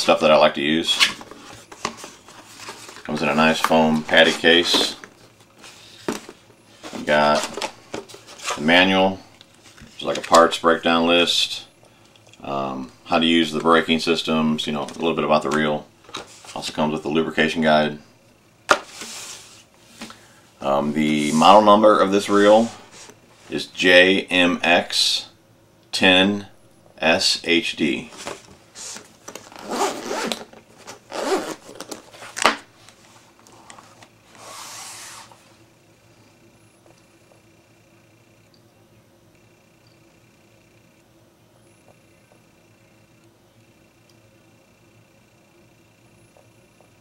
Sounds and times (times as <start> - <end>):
Speech: 0.0 - 1.2, 3.1 - 5.0, 7.0 - 7.6, 8.6 - 9.2, 10.0 - 11.7, 12.4 - 15.9, 16.5 - 18.1, 20.6 - 22.8, 23.5 - 28.1
Inside, small room: 0.0 - 47.0.